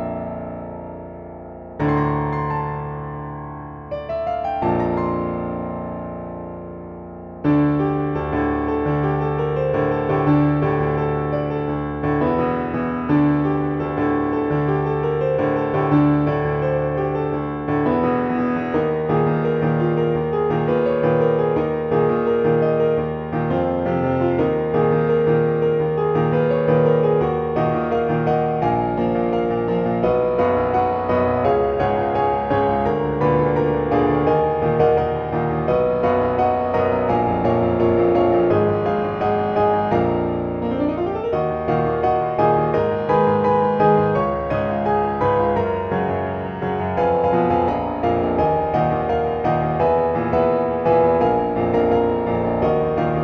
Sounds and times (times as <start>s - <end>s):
Music: 0.0s - 53.2s.